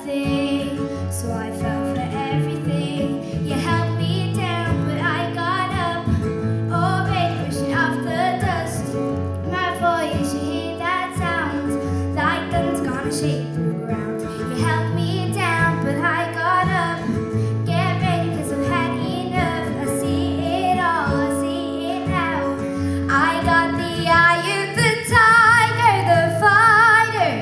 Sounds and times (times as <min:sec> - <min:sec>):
Child singing: 0:00.0 - 0:27.4
Music: 0:00.0 - 0:27.4.